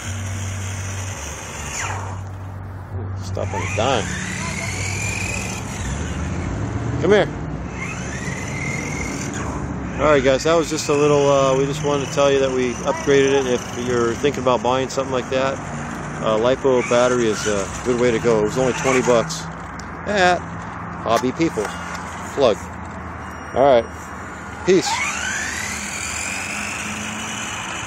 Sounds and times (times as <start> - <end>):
Outside, urban or manmade: 0.0 - 27.8
Vehicle: 0.0 - 27.8.